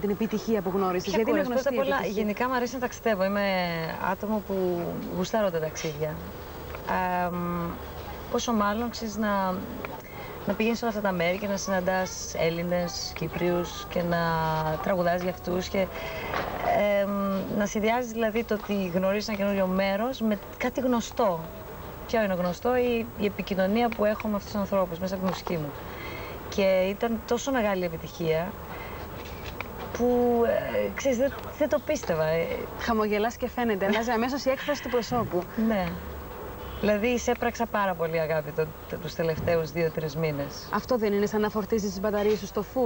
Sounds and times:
Speech: 0.0s - 6.3s, 6.9s - 16.0s, 16.6s - 21.5s, 26.5s - 28.6s, 30.0s - 36.0s, 36.8s - 42.8s.

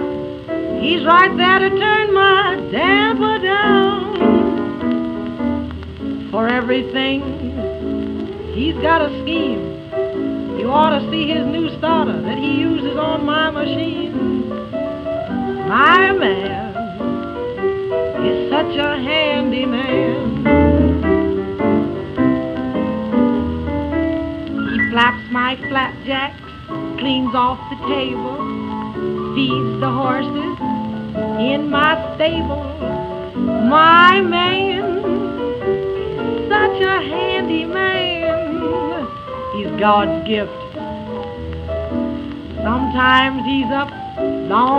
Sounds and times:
Music: 0.0s - 44.7s.

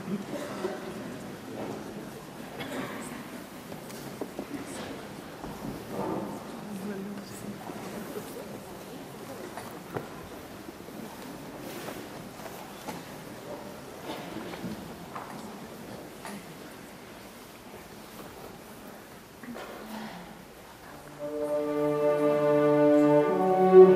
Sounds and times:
Speech: 0.0s - 11.8s.

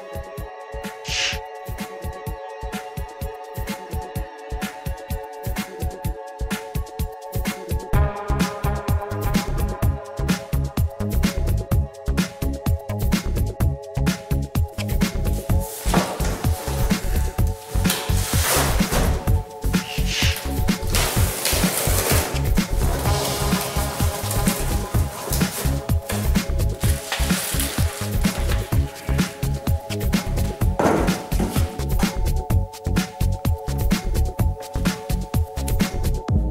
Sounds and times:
Music: 0.0s - 36.5s.

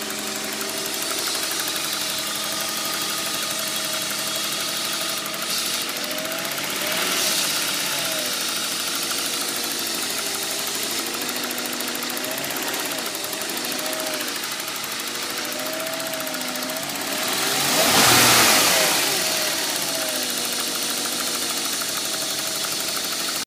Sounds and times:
Idling: 0.0s - 23.4s
Medium engine (mid frequency): 0.0s - 23.4s
Vehicle: 0.0s - 23.4s
Accelerating, revving, vroom: 5.5s - 8.5s, 16.8s - 20.6s.

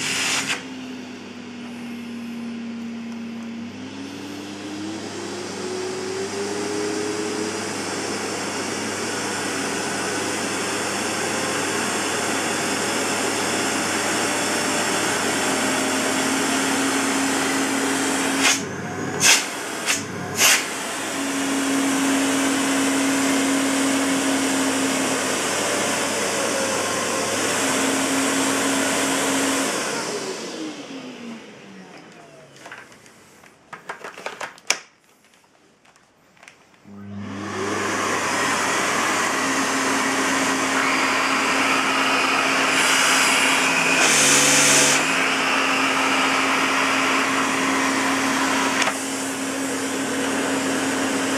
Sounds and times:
Vacuum cleaner: 0.0s - 33.6s, 36.8s - 51.3s.

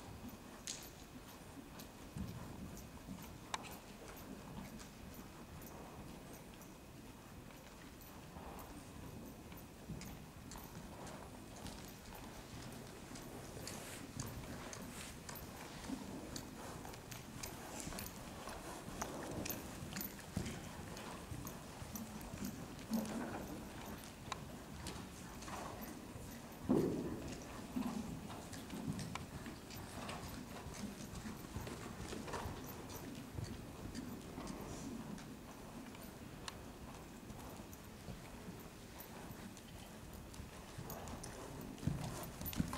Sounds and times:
Clip-clop: 0.0s - 42.7s.

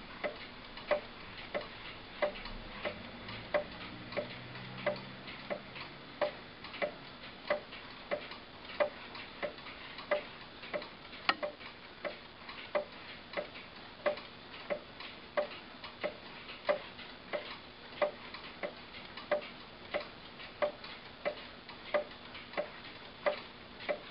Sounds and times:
Tick: 0.2s - 24.0s
Tick-tock: 0.2s - 24.1s.

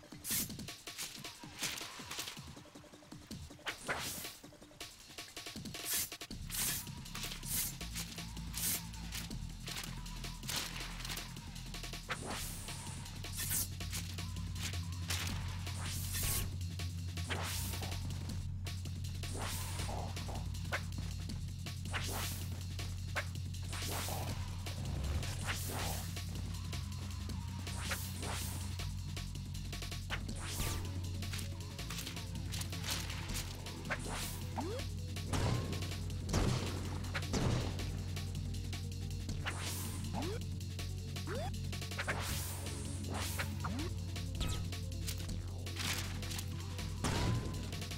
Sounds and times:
Music: 0.0s - 47.9s.

